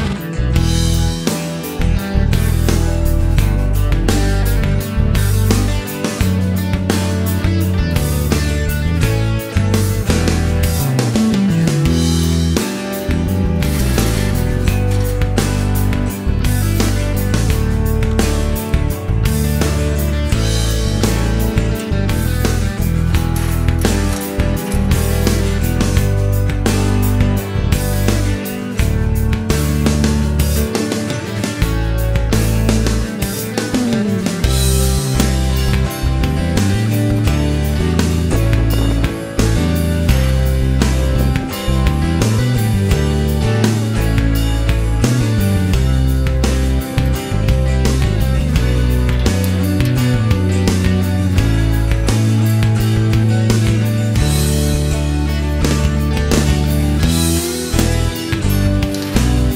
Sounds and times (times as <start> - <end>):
Music: 0.0 - 59.5.